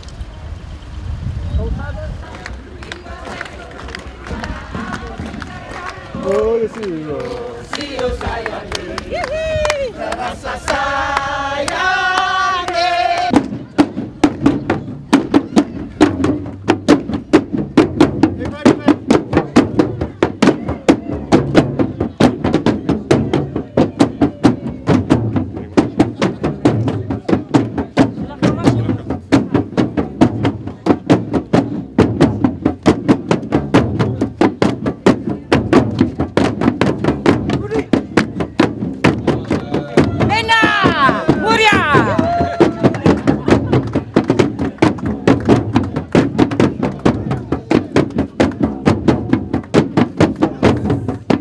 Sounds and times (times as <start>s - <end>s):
Music: 12.6s - 51.4s.